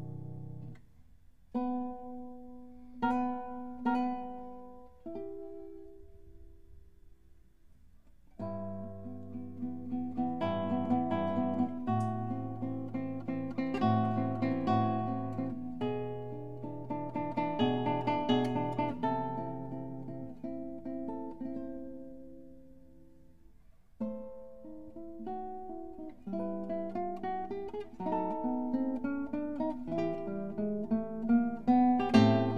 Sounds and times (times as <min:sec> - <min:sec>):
Acoustic guitar: 0:00.0 - 0:32.5
Strum: 0:08.0 - 0:32.5.